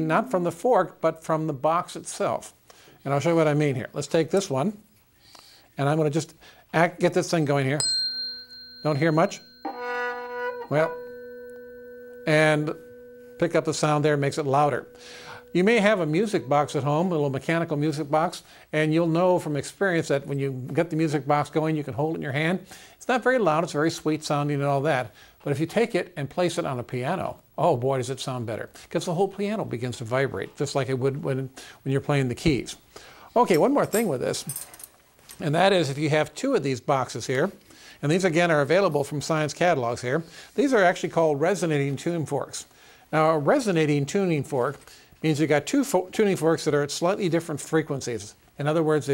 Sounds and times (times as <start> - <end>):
Tuning fork: 7.8 - 17.4.